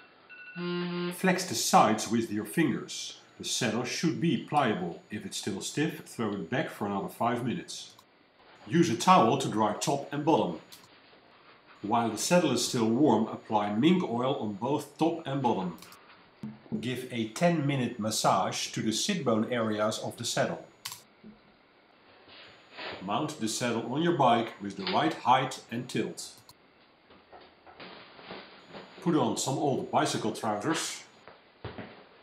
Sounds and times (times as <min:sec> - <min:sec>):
Speech: 0:01.2 - 0:08.0, 0:08.6 - 0:10.7, 0:11.8 - 0:15.9, 0:16.7 - 0:20.7, 0:22.9 - 0:26.5, 0:29.0 - 0:31.2.